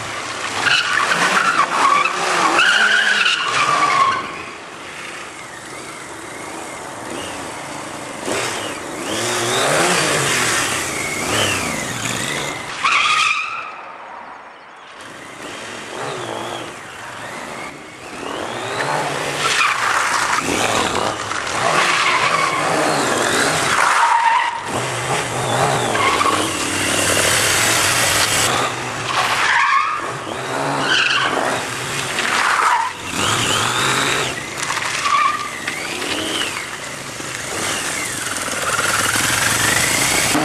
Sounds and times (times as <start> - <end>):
Skidding: 0.0 - 40.4.